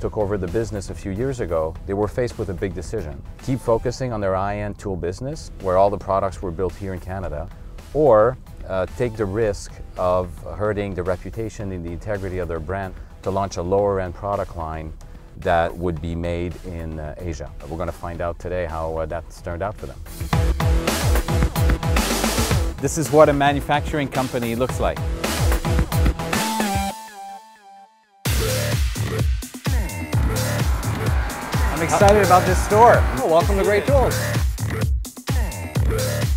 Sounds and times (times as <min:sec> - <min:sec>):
Speech: 0:00.0 - 0:20.0, 0:22.8 - 0:25.0, 0:31.7 - 0:34.3
Music: 0:00.0 - 0:36.3.